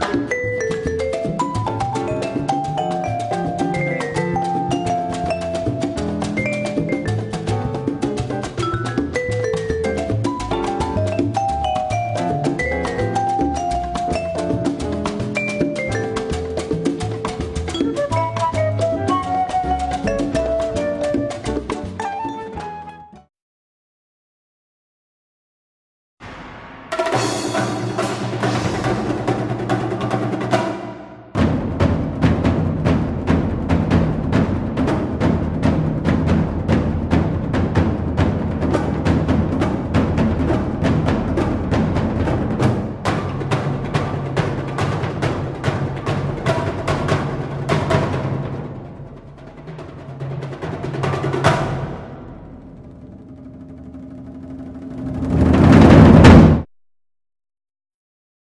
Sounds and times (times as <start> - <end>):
Timpani: 0.0 - 23.3, 26.2 - 56.7.